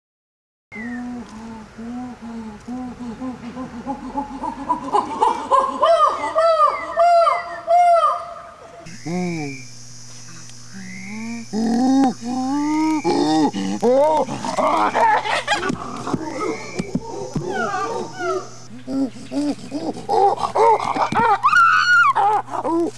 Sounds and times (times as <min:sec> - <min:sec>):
Wild animals: 0:12.8 - 0:22.9.